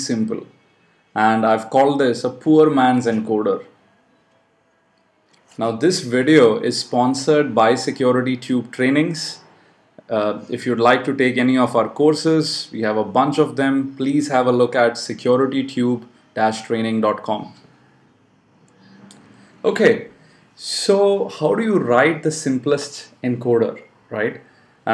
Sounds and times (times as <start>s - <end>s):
Speech: 0.0s - 0.5s, 1.2s - 3.8s, 5.5s - 9.4s, 10.0s - 17.7s, 19.6s - 24.9s.